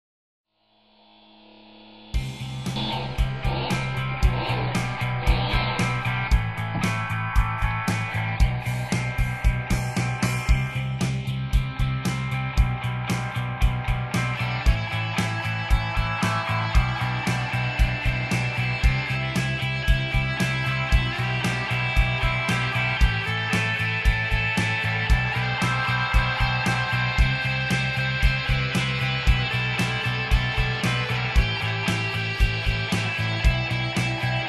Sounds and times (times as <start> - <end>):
Music: 0.7 - 34.4.